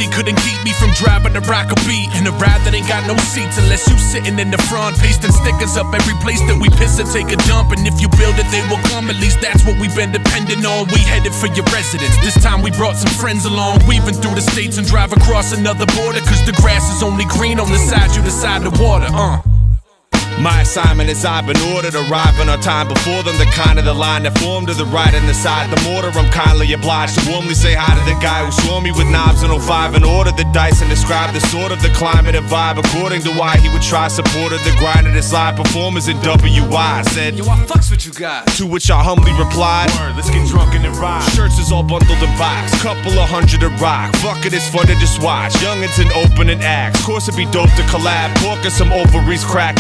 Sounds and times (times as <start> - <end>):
Music: 0.0 - 49.8.